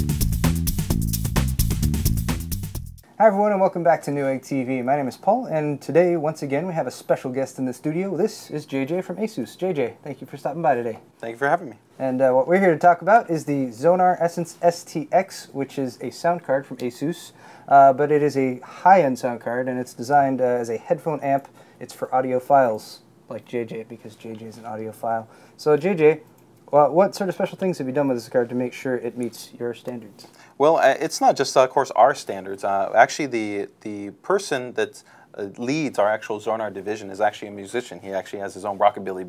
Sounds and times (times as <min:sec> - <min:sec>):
Speech: 0:03.2 - 0:39.2.